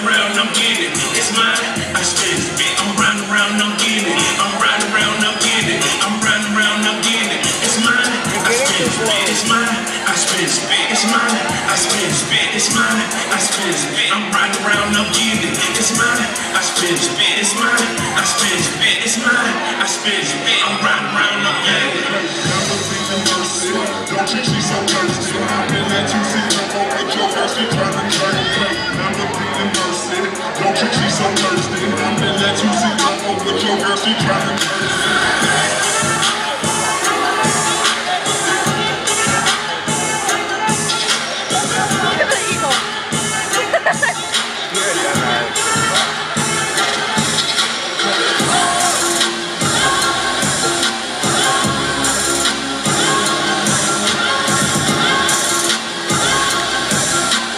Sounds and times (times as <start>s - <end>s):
Speech: 0.0s - 49.1s
Music: 0.0s - 57.5s.